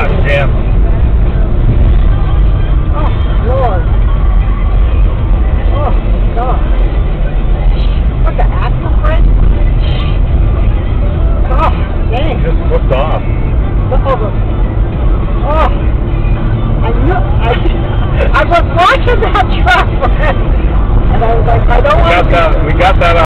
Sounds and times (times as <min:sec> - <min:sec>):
Music: 0:00.0 - 0:23.2
Vehicle: 0:00.0 - 0:23.2.